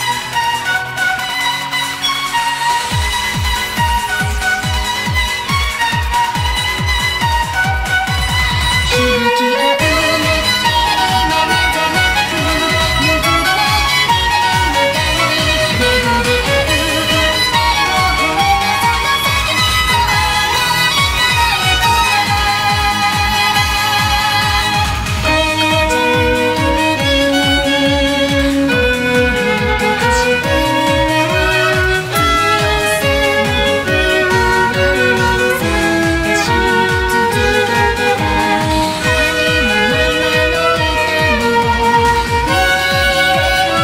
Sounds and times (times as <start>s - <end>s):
Violin, fiddle: 0.0s - 43.8s.